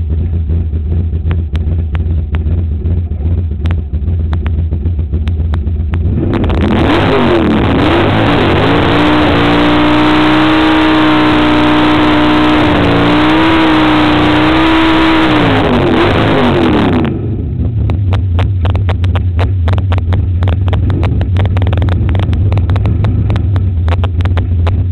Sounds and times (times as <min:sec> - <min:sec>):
Car: 0:00.0 - 0:24.9.